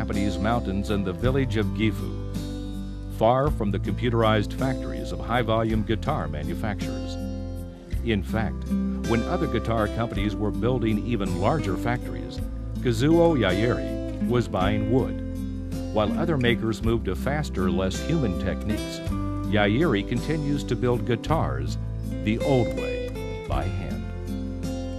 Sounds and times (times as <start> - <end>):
Speech: 0.0 - 2.2, 3.2 - 7.2, 8.0 - 15.2, 16.0 - 24.1
Acoustic guitar: 0.0 - 24.9.